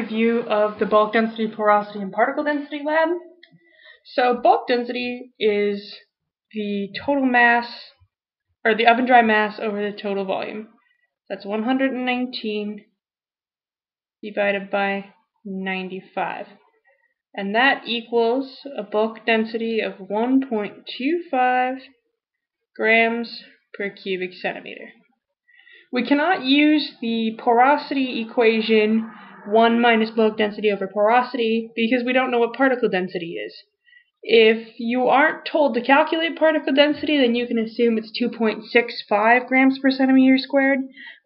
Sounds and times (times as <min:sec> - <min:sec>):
Speech: 0:00.0 - 0:06.0, 0:06.6 - 0:08.0, 0:08.7 - 0:10.7, 0:11.3 - 0:12.8, 0:14.2 - 0:16.6, 0:17.4 - 0:21.9, 0:22.8 - 0:25.0, 0:25.8 - 0:41.2.